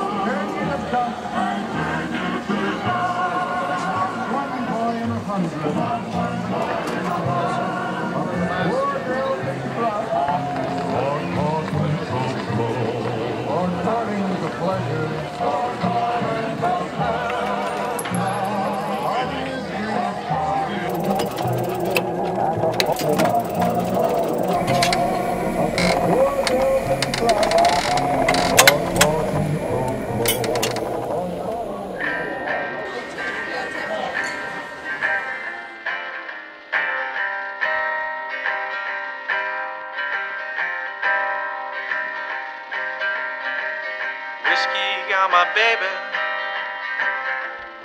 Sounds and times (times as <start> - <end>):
Music: 0.0 - 47.8
Speech: 4.2 - 15.6.